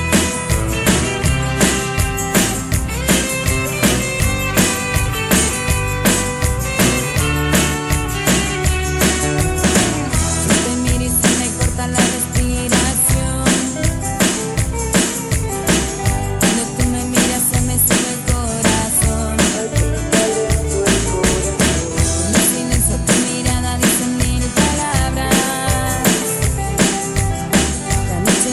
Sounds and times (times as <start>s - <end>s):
Rock and roll: 0.0s - 28.5s.